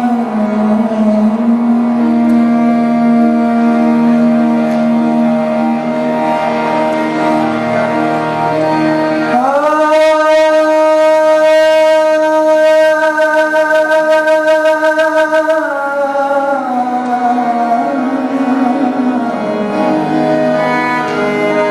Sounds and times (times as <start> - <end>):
Inside, large room or hall: 0.0 - 21.7
Music: 0.0 - 21.7.